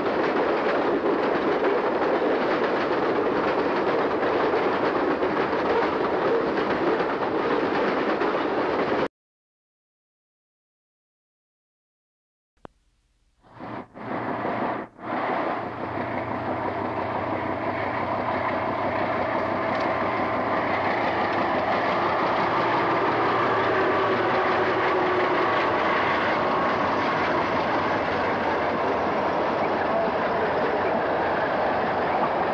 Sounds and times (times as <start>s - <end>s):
Clickety-clack: 0.0s - 9.1s, 15.3s - 32.5s
Railroad car, train wagon: 0.0s - 9.1s, 13.4s - 32.5s
Train: 0.0s - 9.1s, 13.4s - 32.5s.